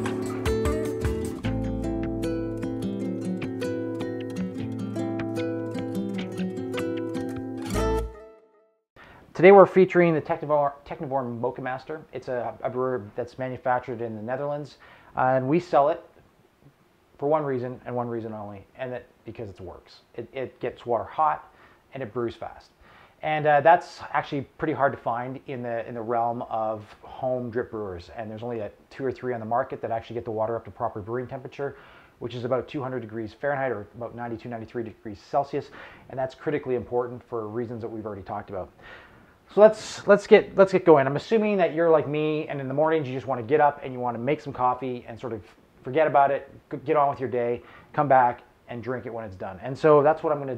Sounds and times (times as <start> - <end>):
Speech: 9.4 - 16.2, 17.2 - 38.8, 39.5 - 50.5.